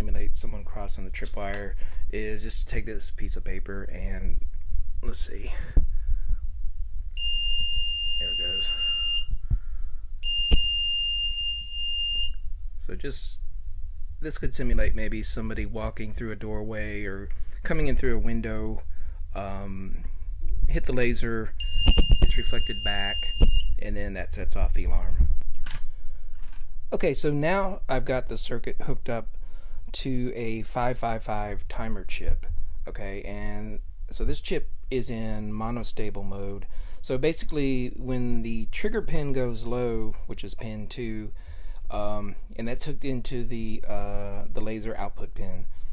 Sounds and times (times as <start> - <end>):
Speech: 0.0 - 4.4, 5.0 - 5.8, 8.2 - 8.8, 12.8 - 13.4, 14.2 - 18.8, 19.4 - 20.0, 20.7 - 21.6, 22.2 - 25.3, 26.9 - 29.3, 29.9 - 45.7.